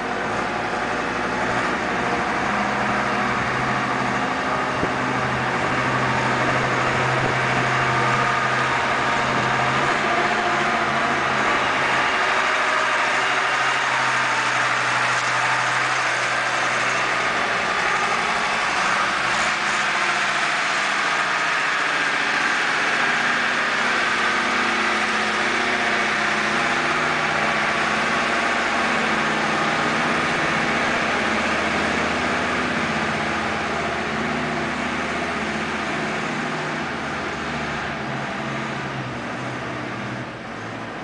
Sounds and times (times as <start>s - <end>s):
Vehicle: 0.0s - 41.0s.